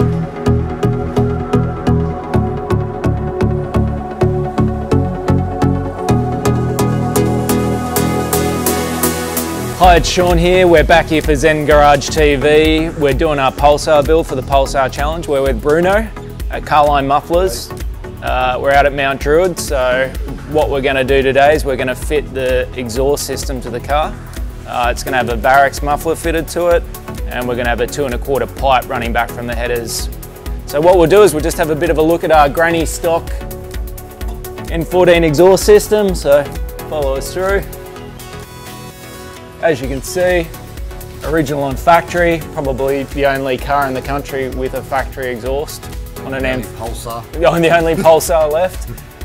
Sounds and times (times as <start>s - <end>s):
Music: 0.0s - 49.2s
Speech: 9.8s - 24.1s, 24.7s - 30.1s, 30.7s - 33.4s, 34.7s - 37.7s, 39.6s - 40.5s, 41.2s - 48.9s.